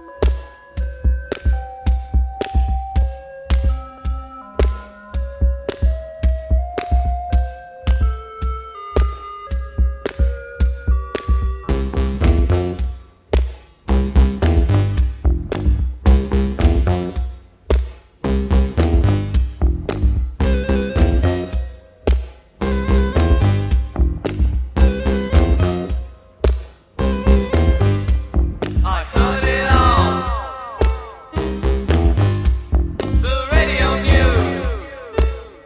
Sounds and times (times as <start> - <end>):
Music: 0.0 - 35.6.